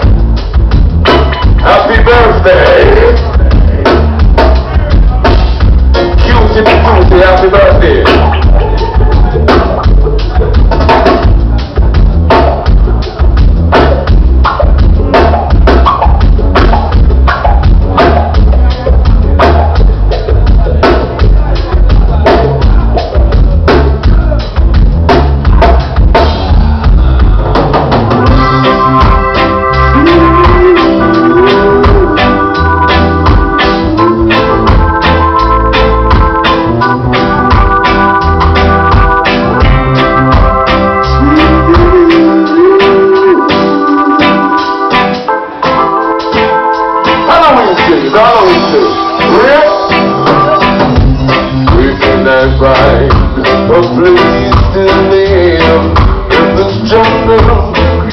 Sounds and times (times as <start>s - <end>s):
Inside, large room or hall: 0.0s - 58.1s
Music: 0.0s - 58.1s.